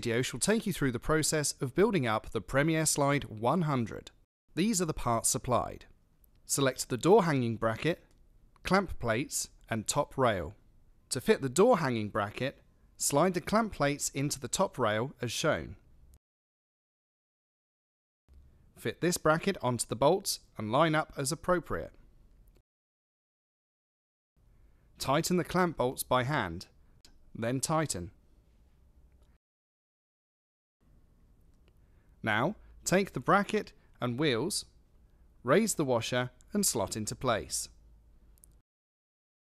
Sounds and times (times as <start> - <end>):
Speech: 0.0 - 5.9, 6.5 - 15.8, 18.8 - 22.0, 25.0 - 26.7, 27.4 - 28.2, 32.2 - 34.7, 35.5 - 37.8.